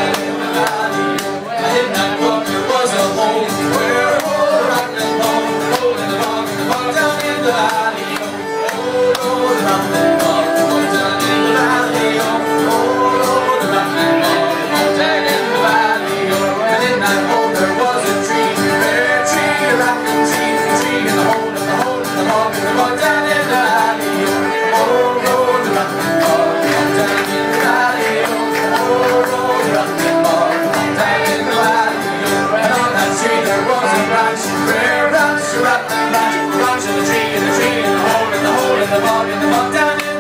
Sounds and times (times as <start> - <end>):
Violin, fiddle: 0.4 - 40.2.